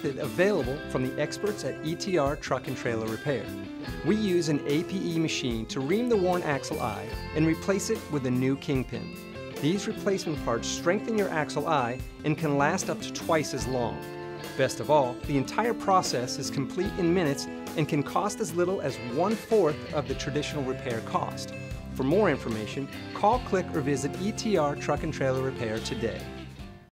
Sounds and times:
Speech: 0.0s - 14.0s, 14.6s - 26.3s
Music: 0.0s - 26.9s.

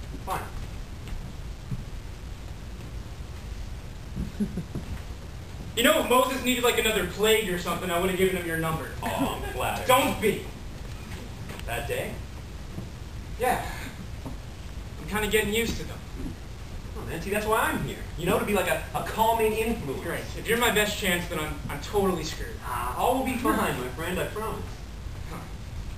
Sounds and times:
Speech: 0.2s - 0.6s, 5.8s - 10.5s, 11.7s - 12.2s, 13.4s - 14.0s, 15.0s - 16.0s, 17.0s - 25.5s.

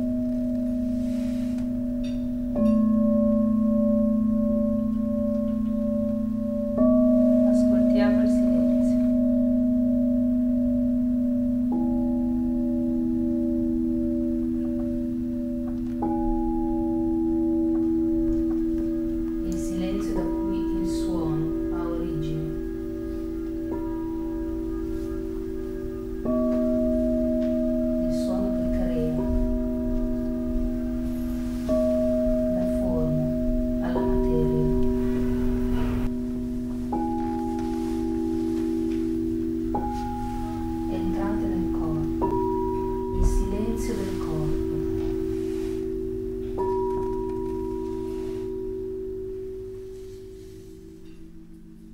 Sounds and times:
Singing bowl: 0.0s - 51.9s
Speech: 7.4s - 9.2s, 19.4s - 22.6s, 28.1s - 29.5s, 32.6s - 34.9s, 40.9s - 42.2s, 43.2s - 44.9s.

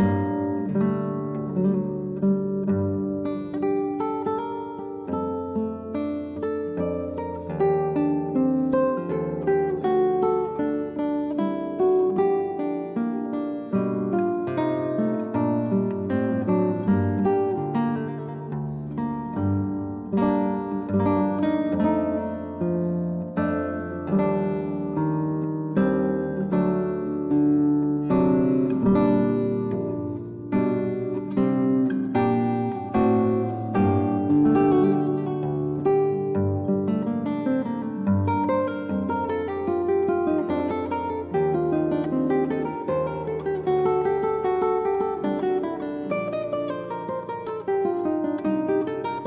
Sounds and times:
Acoustic guitar: 0.0s - 49.2s
Strum: 0.0s - 49.2s.

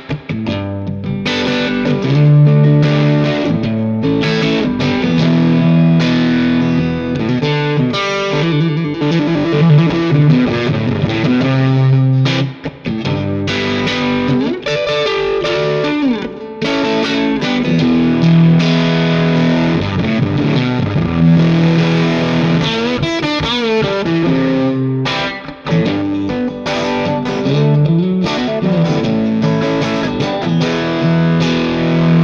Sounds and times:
Electric guitar: 0.0s - 32.2s.

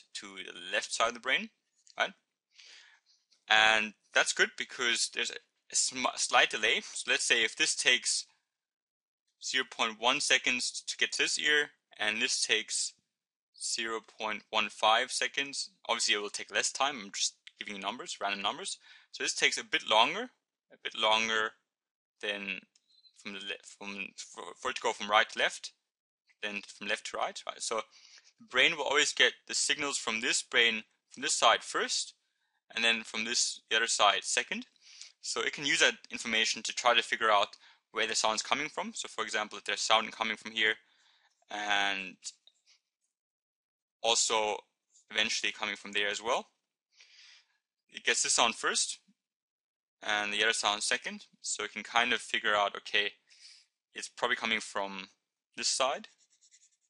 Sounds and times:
Speech: 0.0s - 2.2s, 3.5s - 8.3s, 9.4s - 13.0s, 13.6s - 21.6s, 22.2s - 25.8s, 26.4s - 27.9s, 28.5s - 40.8s, 41.5s - 42.4s, 44.0s - 46.5s, 48.0s - 49.1s, 50.0s - 53.2s, 54.0s - 56.1s.

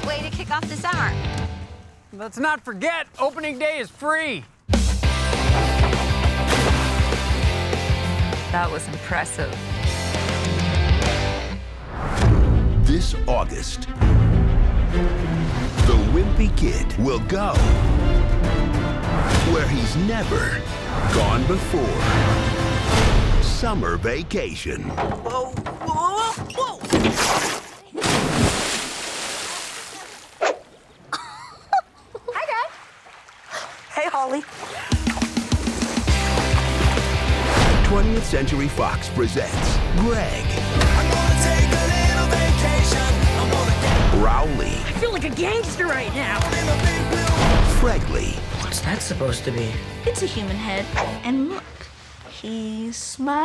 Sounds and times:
Music: 0.0s - 2.0s, 4.7s - 24.4s, 34.9s - 51.5s.

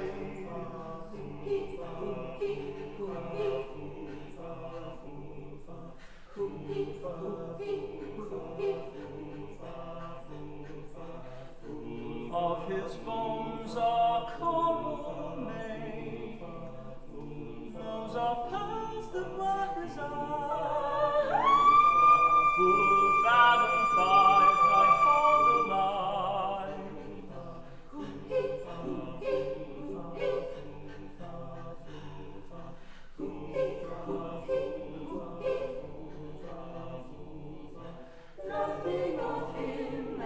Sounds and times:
Music: 0.0s - 40.2s
Whoop: 21.3s - 25.7s.

